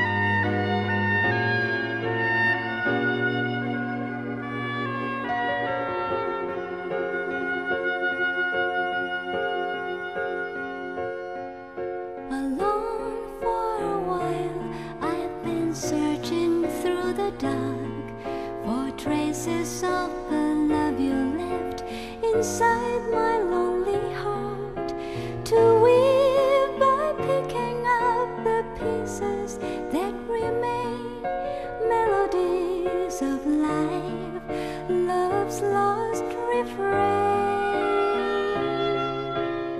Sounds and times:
Music: 0:00.0 - 0:39.7
Female singing: 0:12.3 - 0:38.6.

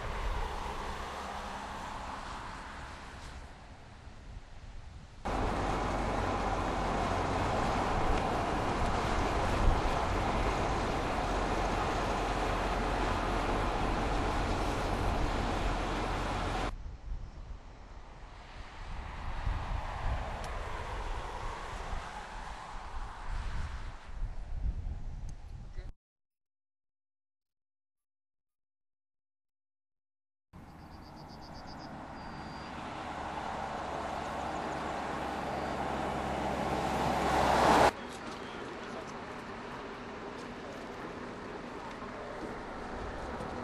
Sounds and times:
Car: 0:00.0 - 0:16.8, 0:17.6 - 0:25.4, 0:30.6 - 0:43.6
Outside, urban or manmade: 0:00.0 - 0:26.0, 0:30.6 - 0:43.6.

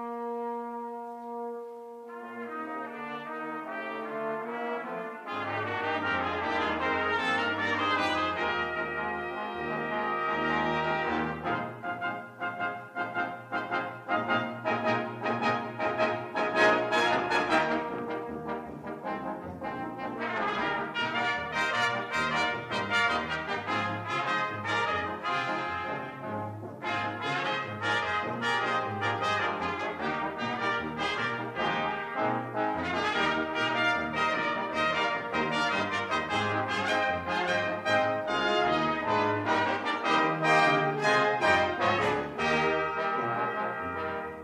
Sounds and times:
Brass instrument: 0:00.0 - 0:44.4
Classical music: 0:00.0 - 0:44.4
Orchestra: 0:00.0 - 0:44.4.

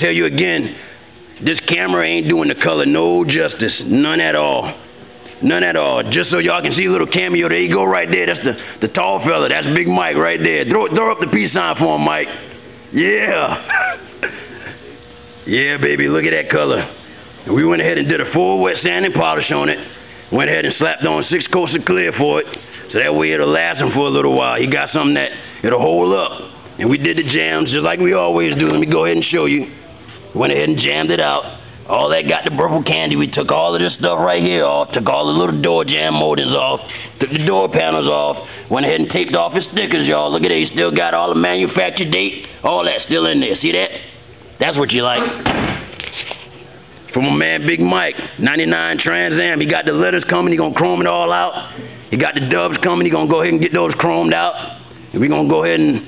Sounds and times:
Speech: 0:00.0 - 0:00.8, 0:01.4 - 0:04.8, 0:05.4 - 0:13.7, 0:15.4 - 0:45.4, 0:47.1 - 0:56.0.

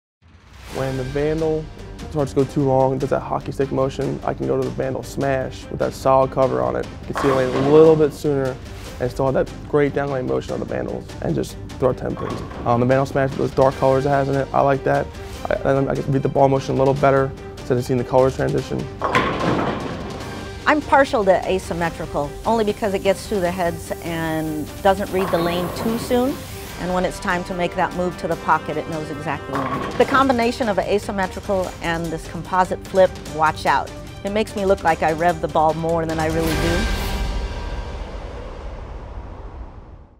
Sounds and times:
Music: 0:00.2 - 0:40.1
Speech: 0:00.8 - 0:18.9, 0:20.7 - 0:36.9.

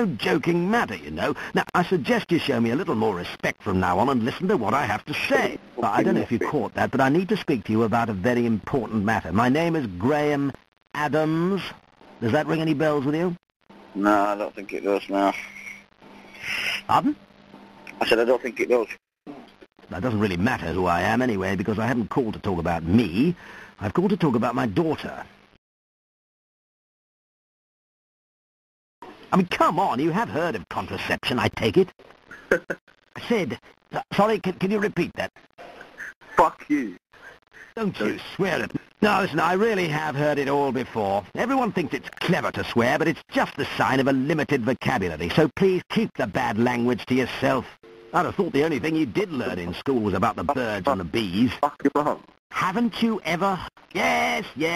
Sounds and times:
Speech: 0:00.0 - 0:13.4, 0:14.0 - 0:15.8, 0:16.4 - 0:17.2, 0:17.9 - 0:25.3, 0:29.3 - 0:31.9, 0:33.2 - 0:35.3, 0:36.4 - 0:37.0, 0:37.8 - 0:54.7.

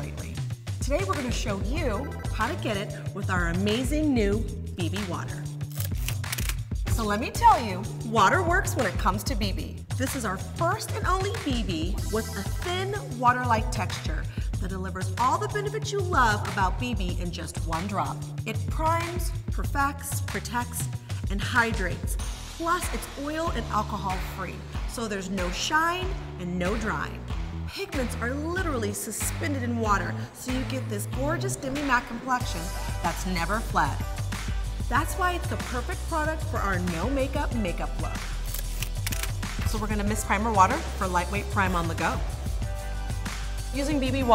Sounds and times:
Speech: 0:00.0 - 0:05.4, 0:07.0 - 0:27.1, 0:27.7 - 0:34.0, 0:34.9 - 0:38.1, 0:39.7 - 0:42.2, 0:43.8 - 0:44.3
Music: 0:00.0 - 0:44.3.

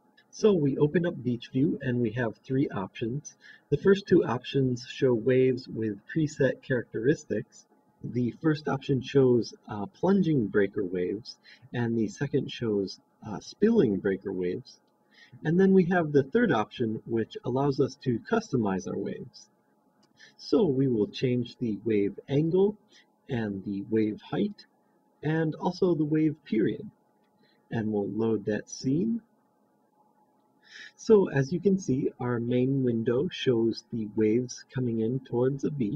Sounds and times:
Speech: 0:00.3 - 0:14.8, 0:15.4 - 0:19.5, 0:20.3 - 0:27.0, 0:27.7 - 0:29.3, 0:30.8 - 0:35.9.

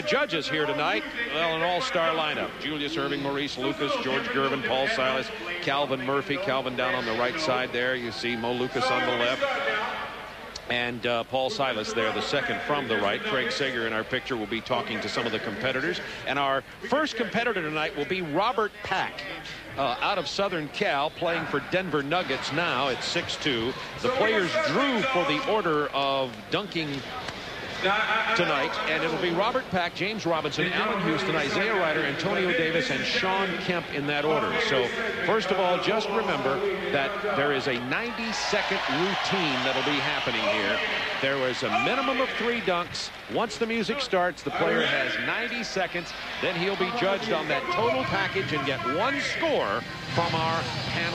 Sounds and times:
Speech: 0:00.0 - 0:10.0, 0:10.6 - 0:51.1.

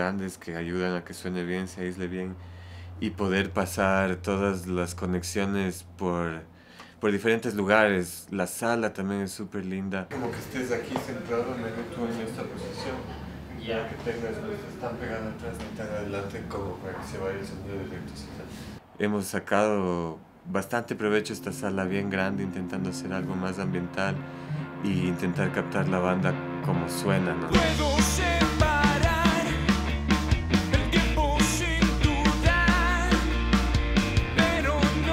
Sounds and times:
Speech: 0:00.0 - 0:02.4, 0:03.0 - 0:24.2, 0:24.8 - 0:27.6.

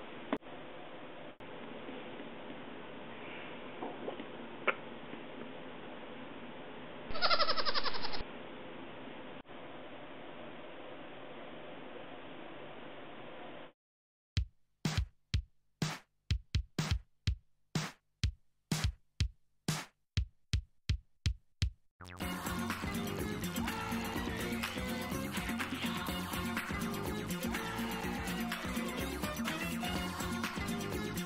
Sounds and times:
Drum machine: 0:14.4 - 0:31.2.

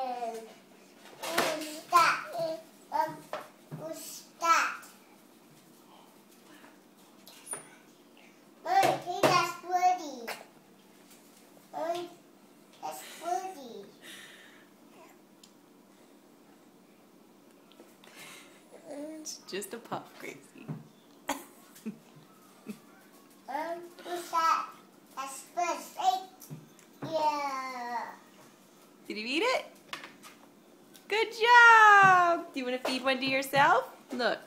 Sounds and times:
Child speech, kid speaking: 0:00.0 - 0:00.5, 0:01.2 - 0:04.9, 0:08.6 - 0:10.5, 0:11.7 - 0:12.2, 0:12.8 - 0:13.9, 0:23.5 - 0:26.4, 0:27.0 - 0:28.2.

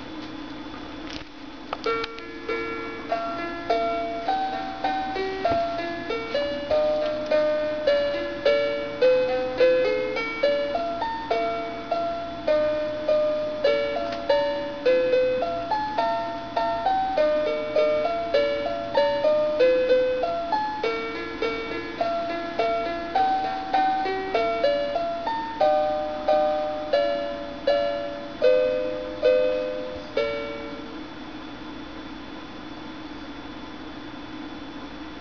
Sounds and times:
Lullaby: 0:01.7 - 0:31.9.

